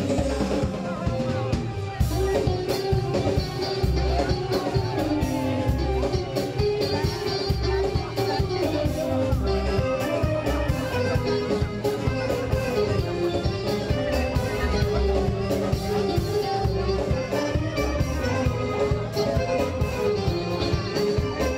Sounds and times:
Music: 0.0 - 21.5
Speech: 0.0 - 21.5.

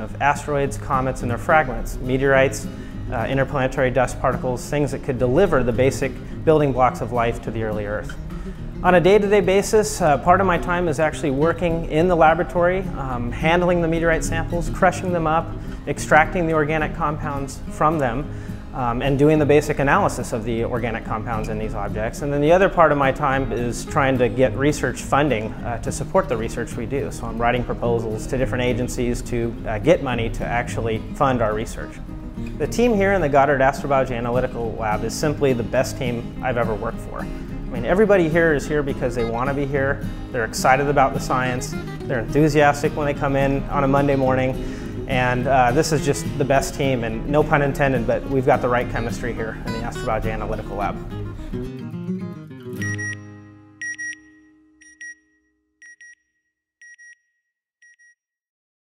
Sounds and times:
Speech: 0.0 - 8.2, 8.8 - 32.0, 32.6 - 51.1
Music: 0.0 - 54.8.

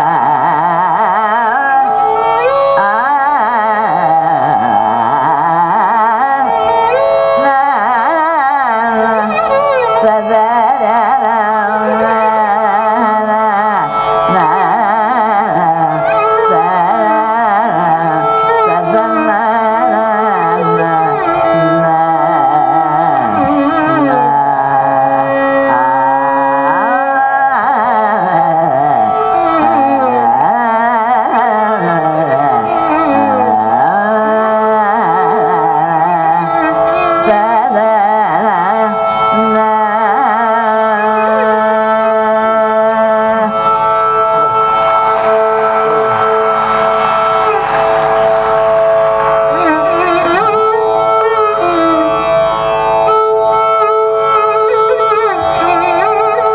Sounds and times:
Carnatic music: 0.0 - 56.5.

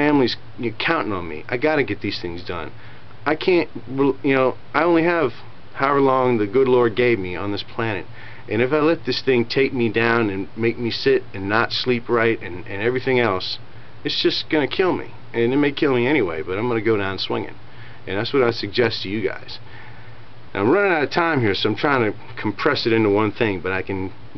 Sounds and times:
Speech: 0.0 - 19.6, 20.5 - 24.3.

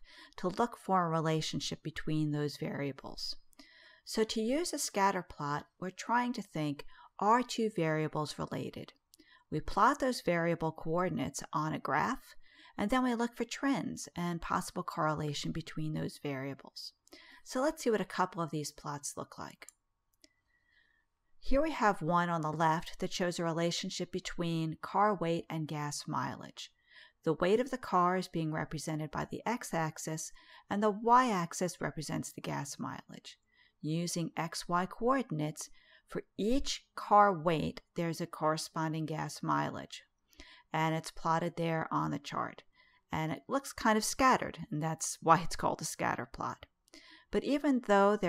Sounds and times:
Speech: 0.3 - 3.4, 4.1 - 19.7, 21.5 - 40.1, 40.7 - 46.7, 47.3 - 48.2.

